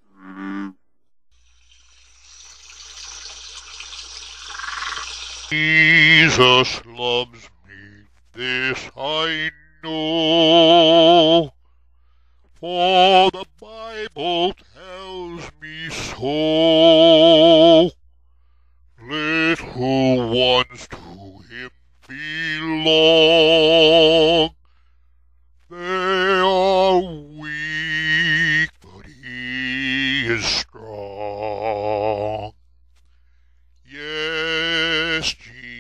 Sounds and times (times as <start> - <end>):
Frog: 0.1 - 0.8, 3.0 - 5.6.